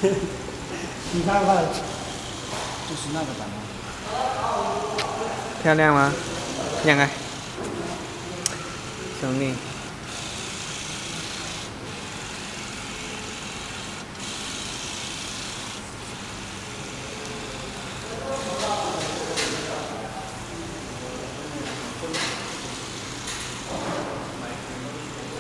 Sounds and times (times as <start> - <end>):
Printer: 0.0 - 25.4.